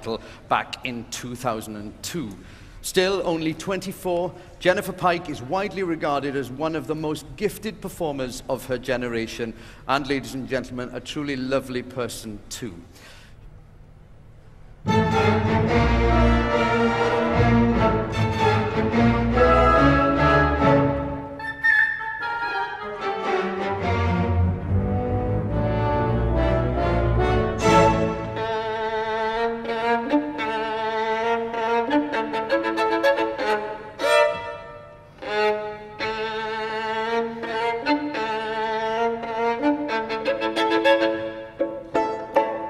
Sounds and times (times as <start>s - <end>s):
Violin, fiddle: 14.9s - 21.4s, 22.2s - 24.6s, 25.6s - 42.6s.